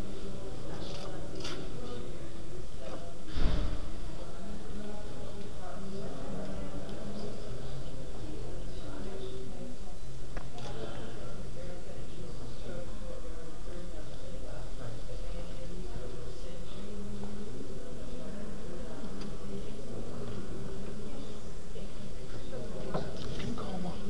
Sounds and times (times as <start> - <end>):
Speech: 0.0 - 24.1.